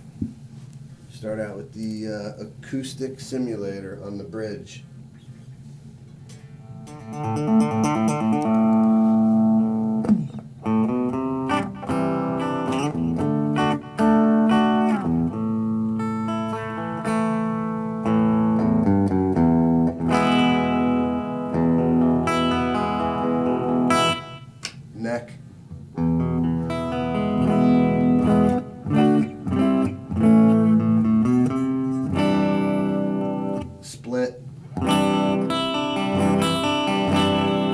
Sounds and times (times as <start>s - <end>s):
Speech: 1.1s - 4.9s, 25.0s - 25.4s, 33.8s - 34.4s
Music: 6.6s - 24.7s, 25.8s - 33.8s, 34.7s - 37.7s.